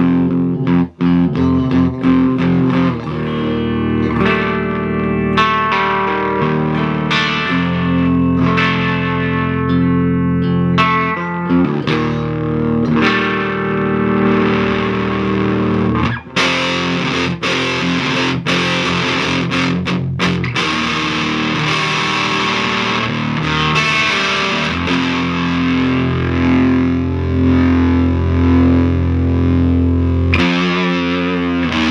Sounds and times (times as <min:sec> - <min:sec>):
Effects unit: 0:00.0 - 0:31.9
Guitar: 0:00.0 - 0:31.9.